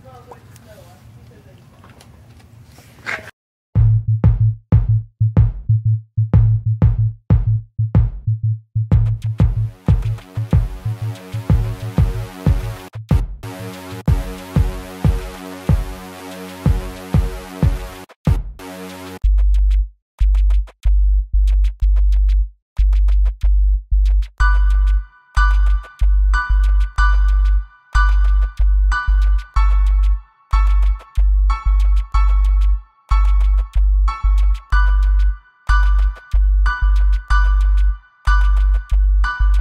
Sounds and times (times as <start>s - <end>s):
Drum machine: 3.8s - 39.6s.